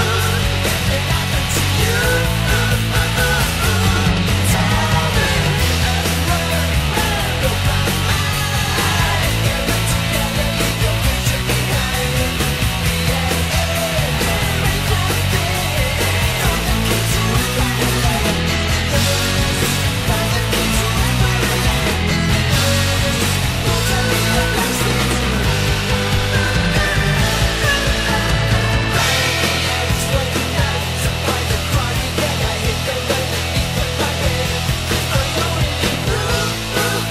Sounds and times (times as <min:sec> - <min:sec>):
Music: 0:00.0 - 0:37.1.